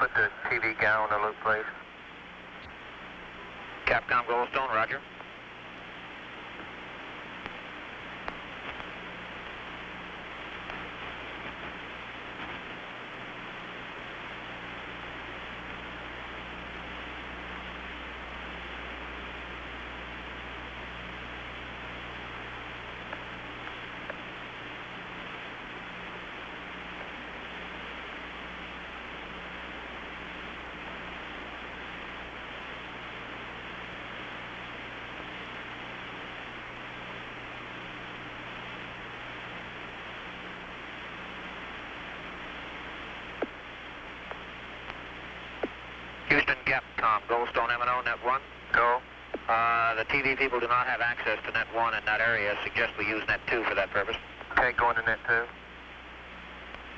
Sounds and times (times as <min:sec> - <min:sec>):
Television: 0:00.0 - 0:56.9.